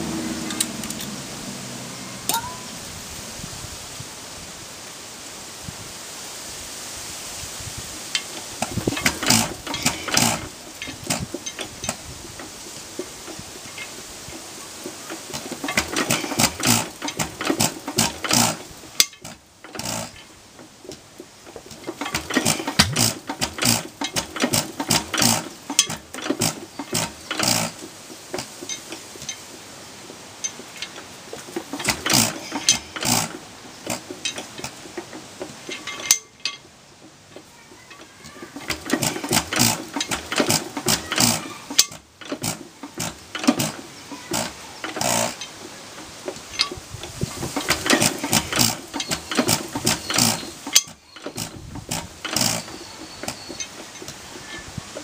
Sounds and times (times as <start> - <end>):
Engine starting: 0.0 - 2.8, 8.2 - 29.6, 30.4 - 36.6, 37.4 - 55.0.